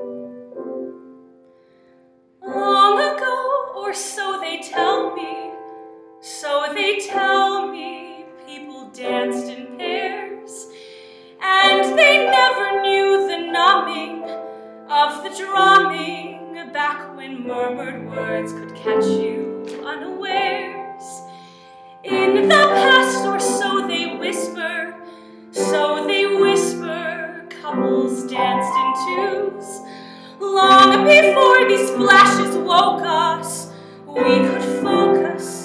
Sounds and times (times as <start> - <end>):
Music: 0.0 - 35.6
Female singing: 2.4 - 5.6, 6.3 - 10.7, 11.4 - 21.3, 22.1 - 25.0, 25.6 - 35.6.